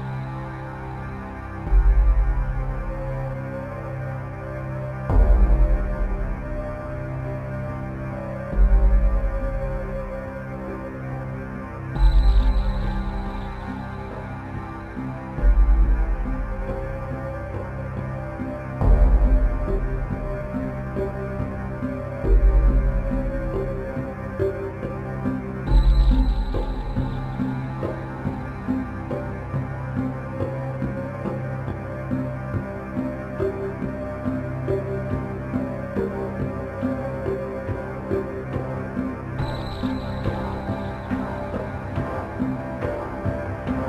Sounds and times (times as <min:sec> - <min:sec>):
Music: 0:00.0 - 0:43.8.